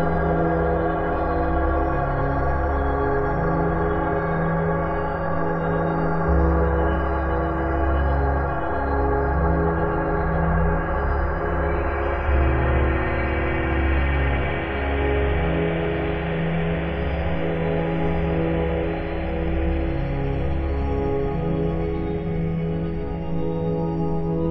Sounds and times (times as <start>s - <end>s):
Ambient music: 0.0s - 24.5s.